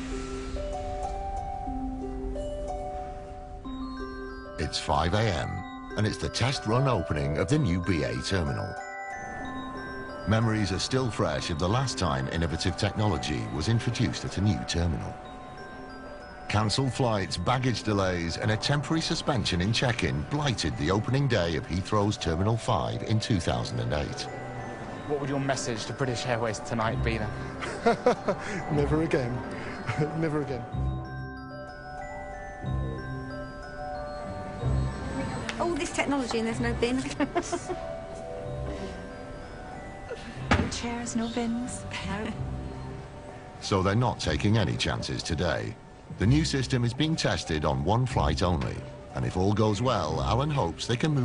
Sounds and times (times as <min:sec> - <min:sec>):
Music: 0:00.0 - 0:51.2.